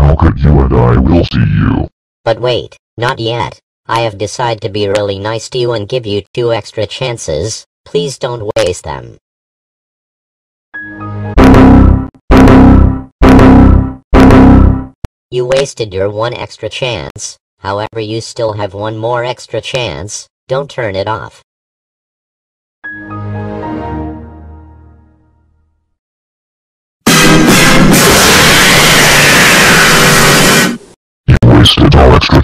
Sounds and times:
Speech: 0.0 - 9.2, 15.3 - 21.4, 31.3 - 32.4
Music: 10.8 - 11.5, 22.8 - 26.0.

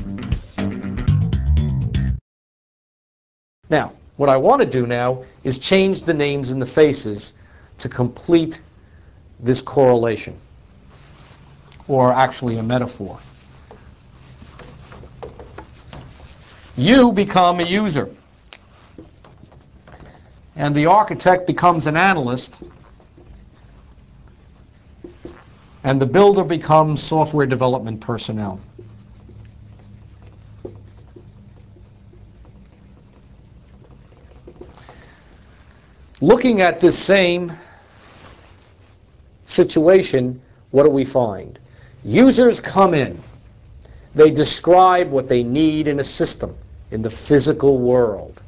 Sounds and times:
Speech: 3.7 - 8.7, 9.4 - 10.4, 11.9 - 13.3, 16.8 - 18.2, 20.6 - 22.6, 25.8 - 28.7, 36.2 - 37.7, 39.5 - 43.3, 44.2 - 48.4.

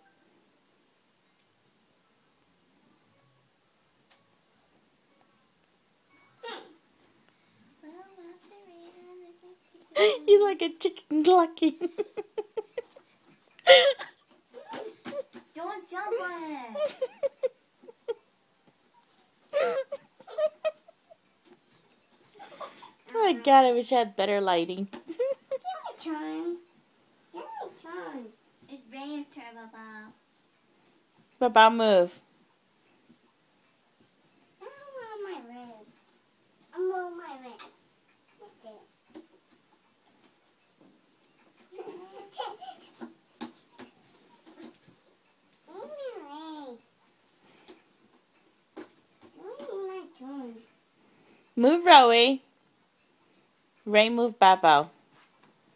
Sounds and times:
Inside, small room: 0.0 - 55.7
Giggle: 10.0 - 10.3, 11.7 - 13.0, 16.8 - 18.2, 19.5 - 21.2, 25.1 - 25.7.

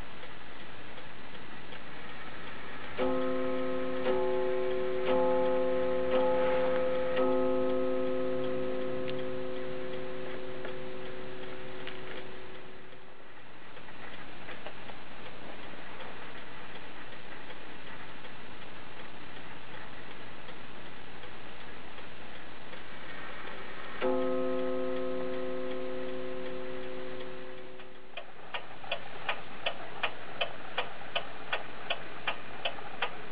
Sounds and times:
Tick-tock: 0.0 - 13.1, 13.7 - 33.3.

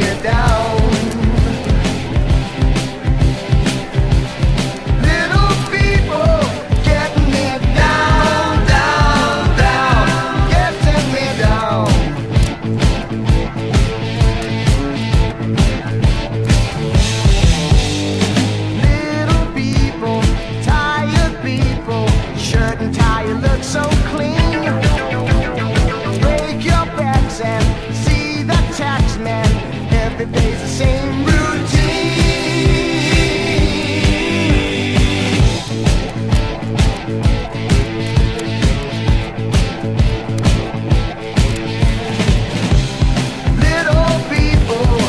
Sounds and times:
Independent music: 0.0 - 45.0
Rock and roll: 0.0 - 45.0.

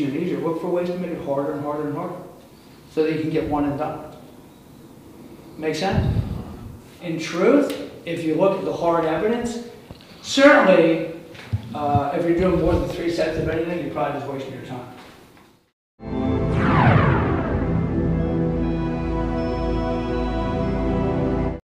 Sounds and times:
Speech: 0.0 - 2.3, 3.0 - 4.2, 5.6 - 6.4, 7.0 - 9.7, 10.3 - 15.0
Music: 16.0 - 21.6.

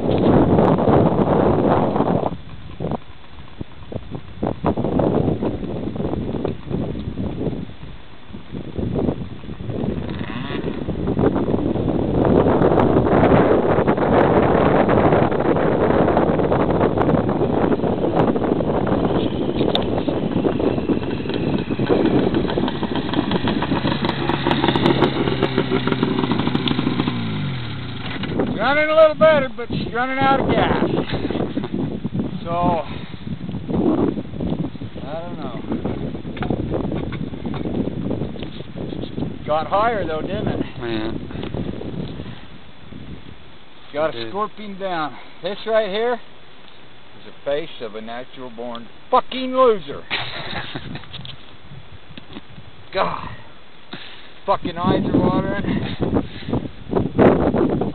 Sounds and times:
Vehicle: 0.0 - 45.6
Outside, rural or natural: 0.0 - 57.9
Speech: 28.6 - 31.0, 35.0 - 35.7, 39.5 - 41.1, 43.9 - 46.2, 47.2 - 50.1, 52.9 - 53.4, 54.4 - 55.8.

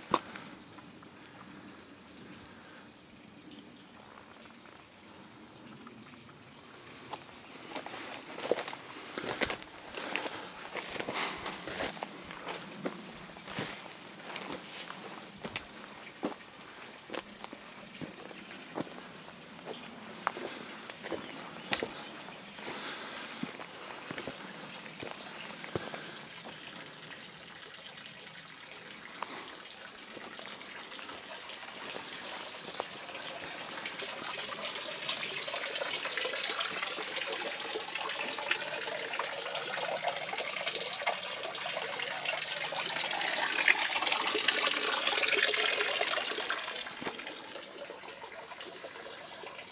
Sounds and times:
Gush: 4.0 - 49.7
Water tap, faucet: 24.2 - 49.7.

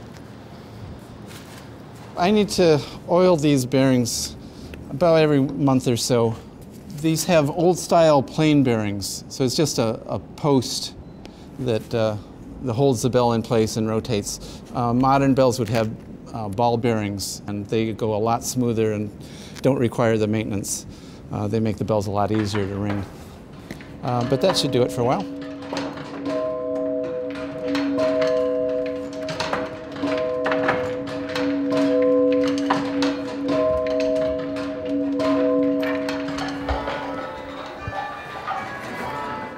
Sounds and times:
Speech: 2.2 - 11.0, 11.6 - 23.1, 24.0 - 25.3.

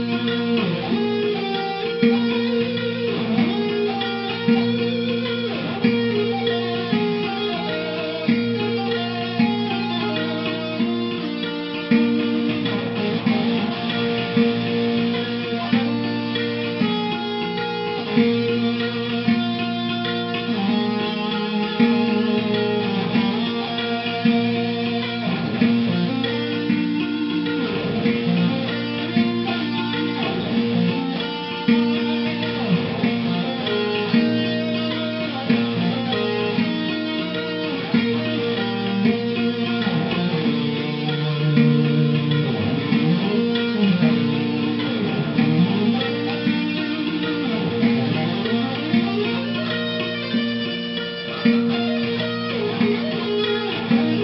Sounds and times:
Electric guitar: 0.0 - 54.2.

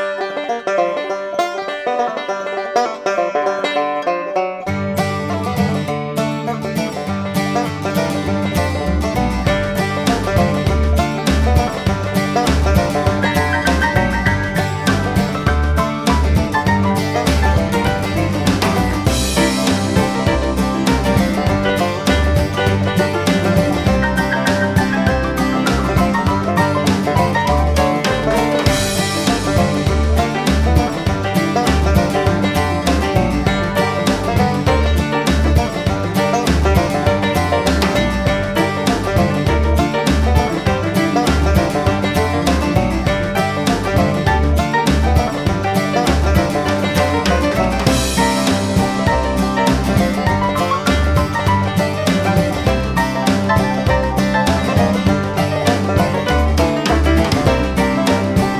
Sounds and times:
Music: 0.0 - 58.5.

